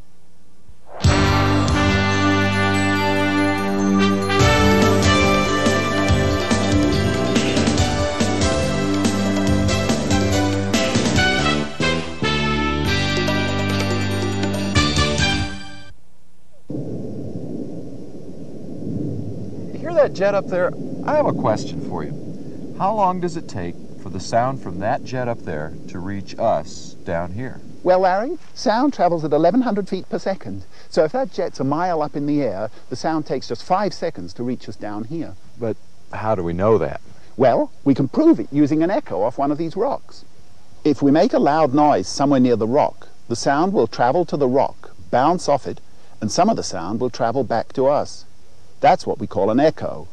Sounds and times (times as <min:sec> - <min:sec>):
Speech: 0:19.8 - 0:22.2, 0:22.8 - 0:50.1.